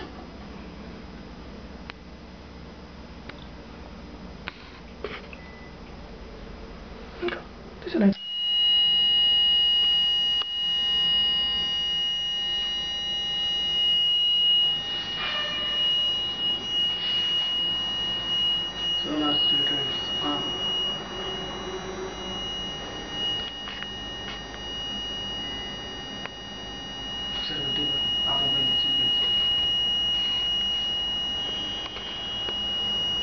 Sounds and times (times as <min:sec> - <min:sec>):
Beep, bleep: 0:05.4 - 0:05.8, 0:27.2 - 0:33.2.